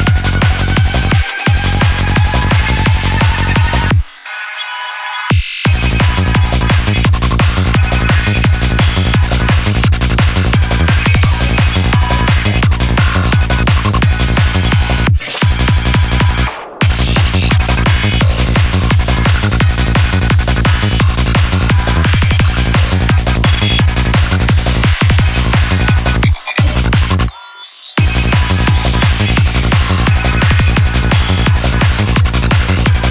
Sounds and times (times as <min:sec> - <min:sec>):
Electronic music: 0:00.0 - 0:33.1.